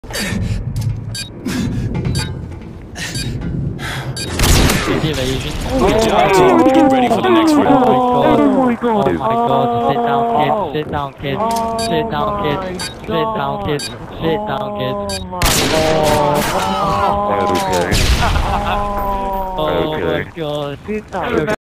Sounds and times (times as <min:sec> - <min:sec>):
Speech: 0:04.9 - 0:21.6.